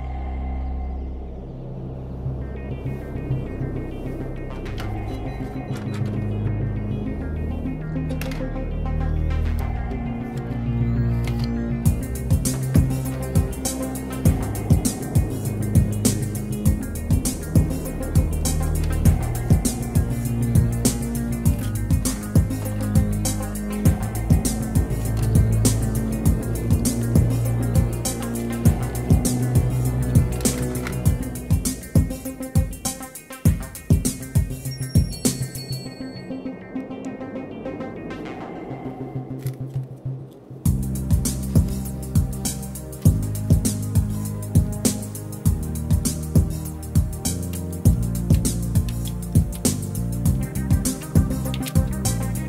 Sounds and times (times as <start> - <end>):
Music: 0.0 - 52.4.